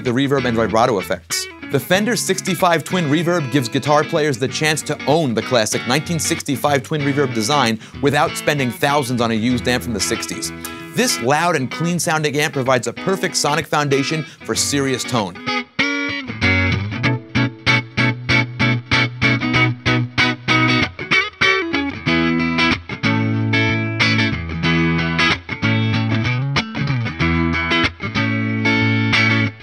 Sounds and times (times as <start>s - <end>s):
Distortion: 0.0s - 29.6s
Electric guitar: 0.0s - 29.6s.